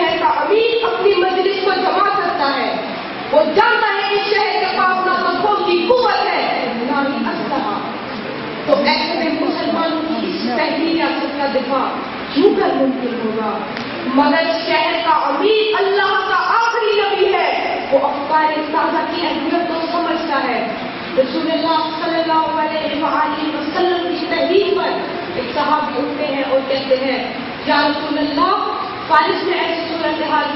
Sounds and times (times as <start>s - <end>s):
Narration, monologue: 0.0s - 30.5s.